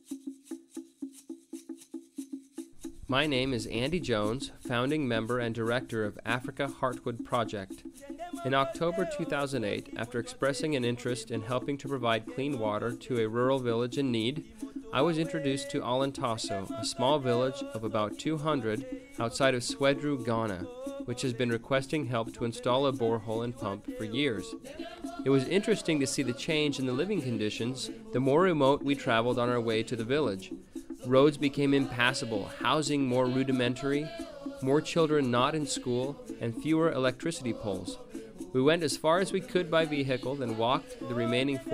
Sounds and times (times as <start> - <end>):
Music: 0.0 - 41.7
Speech: 3.1 - 7.7, 8.4 - 24.6, 25.3 - 41.7.